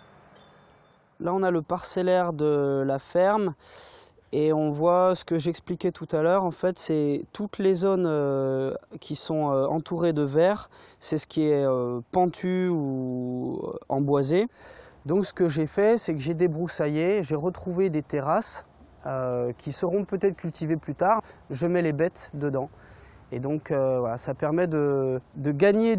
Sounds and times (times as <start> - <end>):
Speech: 1.2 - 3.6, 4.3 - 22.7, 23.3 - 25.9.